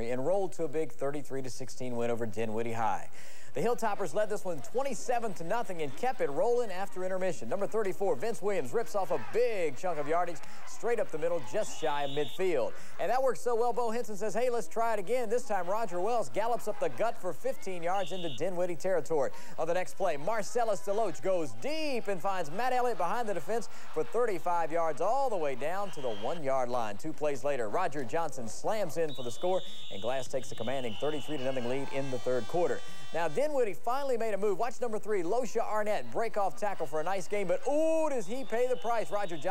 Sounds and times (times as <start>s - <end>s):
Speech: 0.0s - 39.5s.